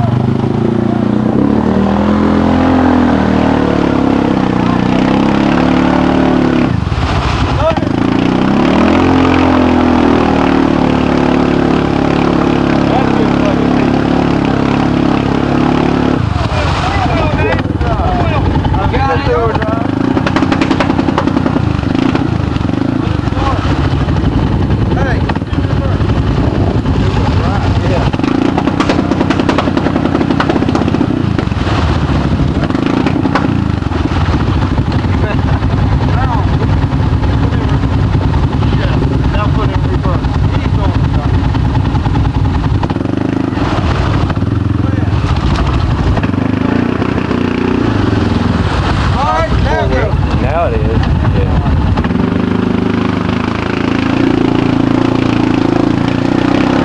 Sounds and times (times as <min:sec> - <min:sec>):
Speech: 0:07.6 - 0:08.0, 0:12.8 - 0:14.6, 0:16.2 - 0:19.9, 0:23.3 - 0:23.7, 0:24.9 - 0:26.0, 0:27.2 - 0:28.2, 0:36.0 - 0:36.6, 0:38.6 - 0:41.4, 0:49.2 - 0:51.7.